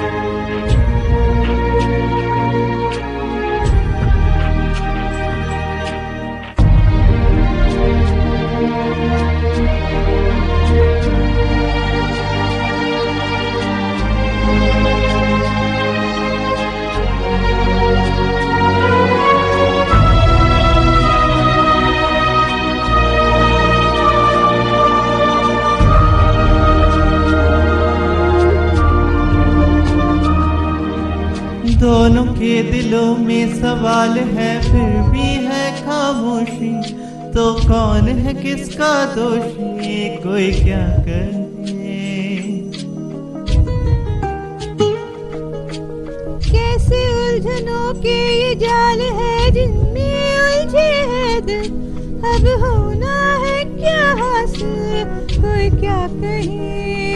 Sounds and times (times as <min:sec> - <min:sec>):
Music: 0:00.0 - 0:57.1.